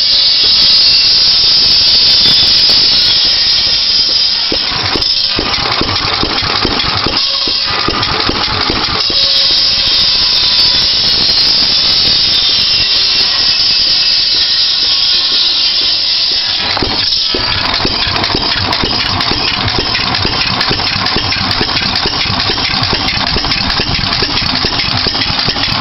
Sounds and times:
Idling: 1.2s - 25.8s.

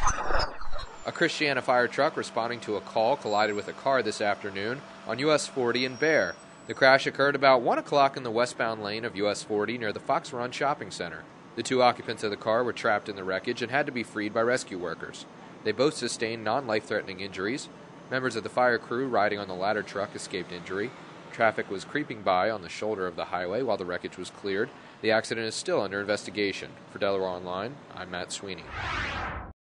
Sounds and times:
Speech: 1.1s - 28.7s.

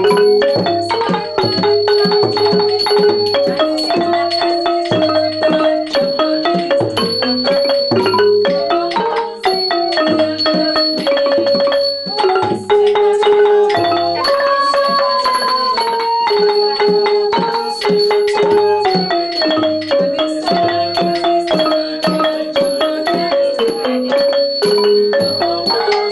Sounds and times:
Music: 0.0s - 26.1s.

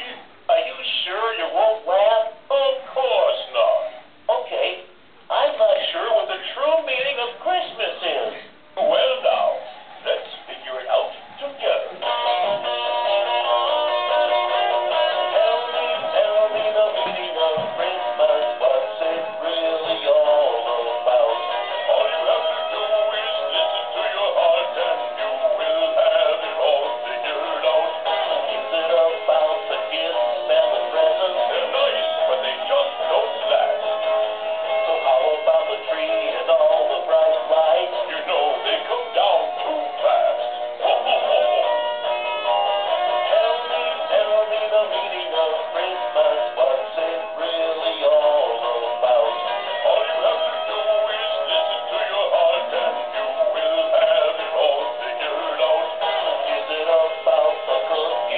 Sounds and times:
Male singing: 0.0s - 12.7s, 14.6s - 41.8s, 42.8s - 58.3s
Music: 5.3s - 58.3s
Synthetic singing: 14.9s - 41.8s, 42.8s - 58.3s.

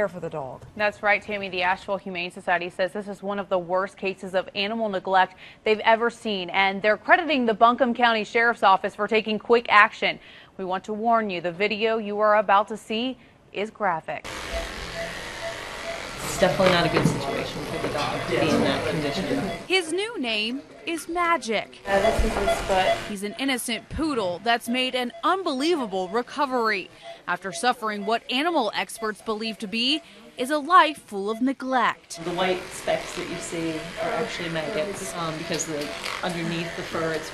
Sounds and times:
Speech: 16.4s - 37.3s.

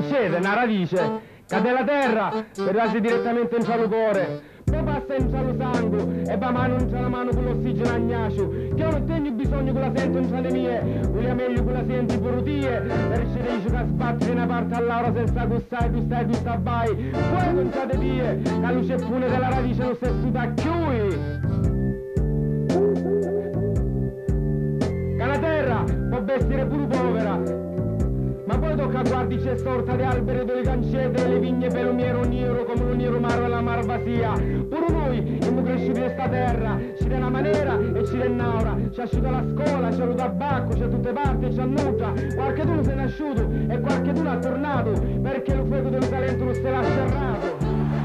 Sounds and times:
Speech: 0.0s - 21.4s, 25.2s - 27.6s, 28.5s - 48.0s
Music: 0.0s - 48.0s.

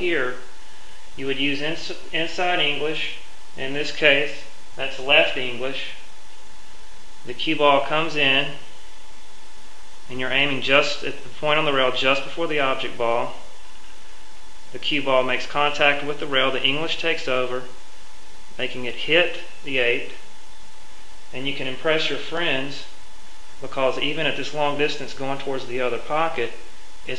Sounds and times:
Speech: 0.0s - 0.5s, 1.2s - 6.1s, 7.3s - 8.7s, 10.1s - 13.5s, 14.7s - 17.8s, 18.6s - 20.3s, 21.3s - 23.0s, 23.6s - 27.1s
Inside, small room: 0.0s - 27.1s.

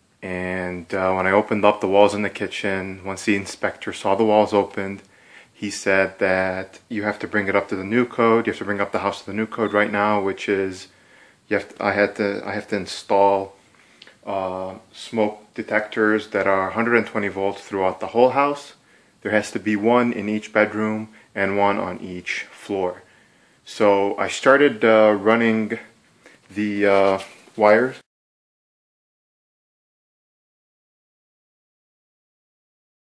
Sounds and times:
Speech: 0.2s - 10.9s, 11.5s - 13.6s, 14.2s - 28.1s.

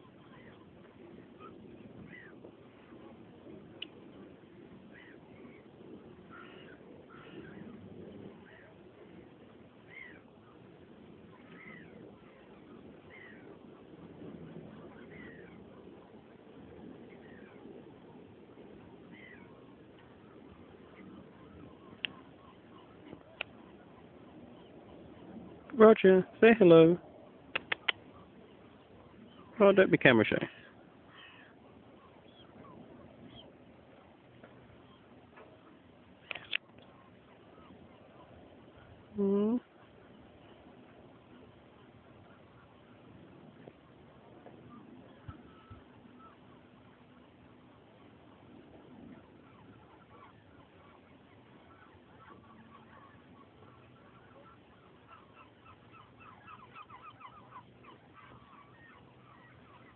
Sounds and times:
Animal: 0.0s - 26.4s, 27.2s - 59.9s
Speech: 25.7s - 27.0s, 29.6s - 30.6s, 39.2s - 39.6s.

